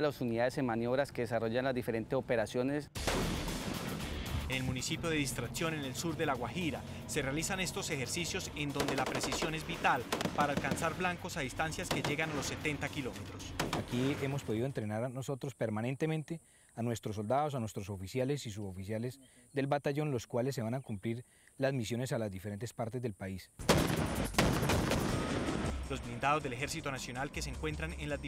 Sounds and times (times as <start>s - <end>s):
Machine gun: 8.6s - 11.2s, 11.8s - 12.6s, 23.7s - 25.7s.